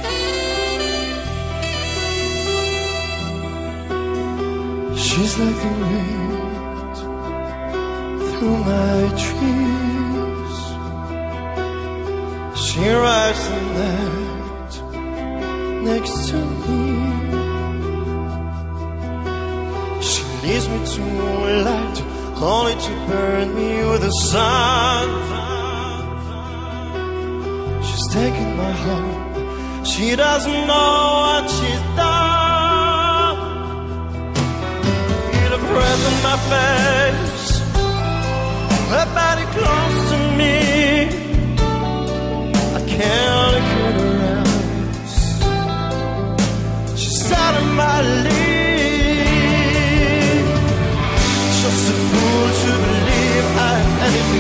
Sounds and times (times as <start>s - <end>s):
Music: 0.0s - 54.4s.